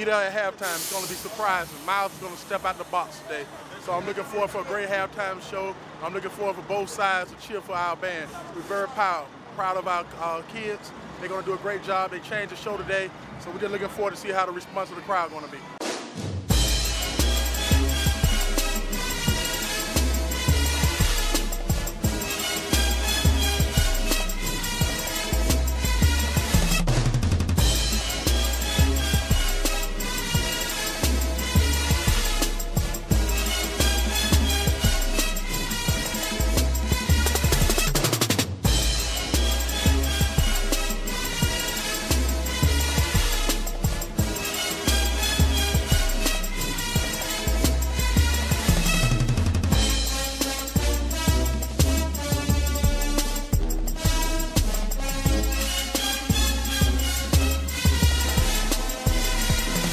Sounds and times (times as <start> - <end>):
Music: 15.8 - 59.9.